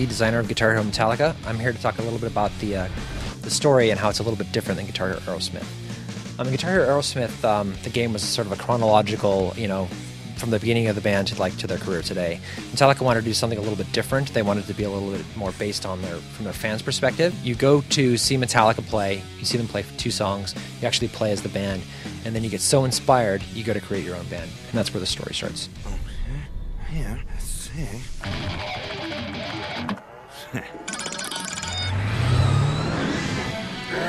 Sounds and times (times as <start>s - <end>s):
Speech: 0.0s - 5.7s, 6.4s - 28.3s, 30.4s - 30.7s.